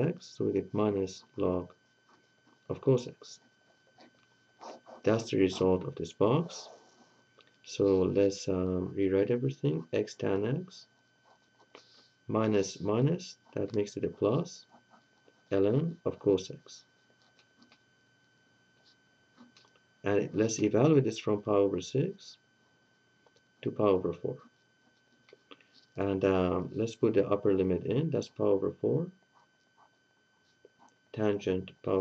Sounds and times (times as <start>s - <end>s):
Speech: 0.0s - 1.7s, 2.7s - 3.4s, 5.1s - 6.8s, 7.7s - 10.9s, 12.3s - 14.7s, 15.5s - 16.9s, 20.1s - 22.4s, 23.6s - 24.4s, 26.0s - 29.2s, 31.2s - 32.0s
Inside, small room: 0.0s - 32.0s.